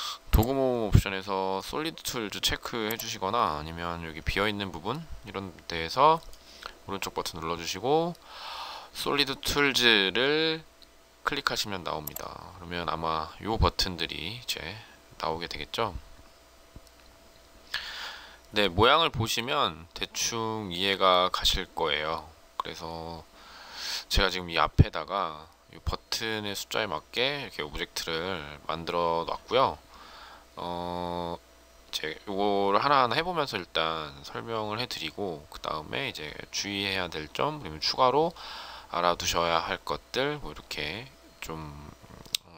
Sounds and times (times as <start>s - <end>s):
Speech: 0.3s - 6.3s, 6.9s - 8.2s, 9.0s - 16.0s, 18.5s - 23.3s, 24.1s - 29.8s, 30.6s - 42.5s.